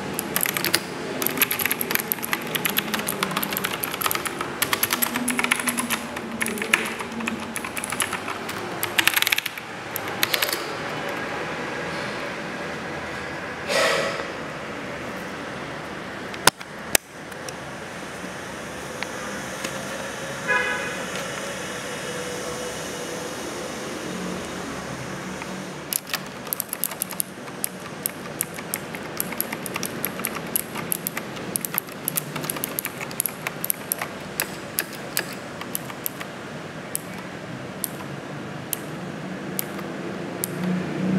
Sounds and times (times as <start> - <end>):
Computer keyboard: 0.0 - 11.3, 25.9 - 36.3, 37.0 - 38.1, 39.6 - 40.8.